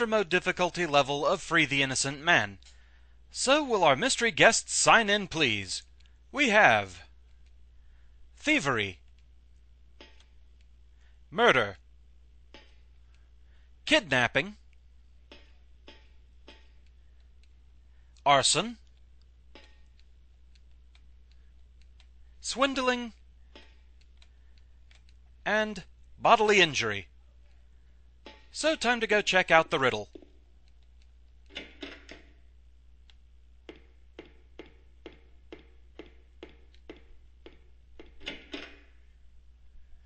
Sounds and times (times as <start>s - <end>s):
Speech: 0.0s - 2.6s, 3.4s - 5.8s, 6.4s - 7.1s, 8.4s - 9.0s, 11.3s - 11.8s, 13.9s - 14.6s, 18.2s - 18.8s, 22.4s - 23.2s, 25.4s - 27.5s, 28.6s - 30.1s.